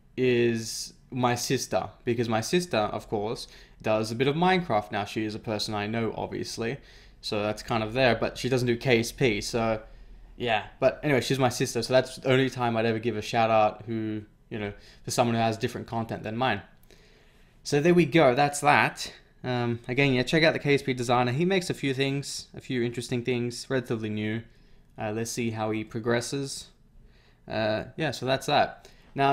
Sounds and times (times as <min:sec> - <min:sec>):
Speech: 0:00.2 - 0:09.8, 0:10.4 - 0:16.7, 0:17.6 - 0:26.8, 0:27.5 - 0:29.3.